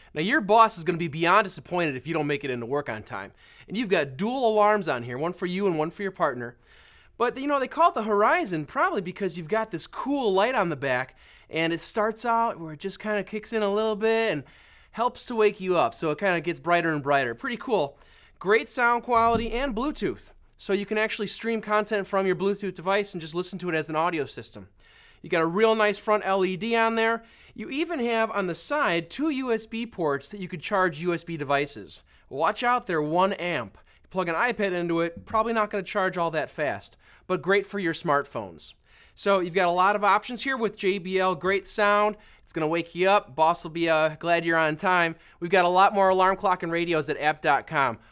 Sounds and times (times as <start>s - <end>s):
Speech: 0.2s - 6.6s, 7.2s - 48.0s.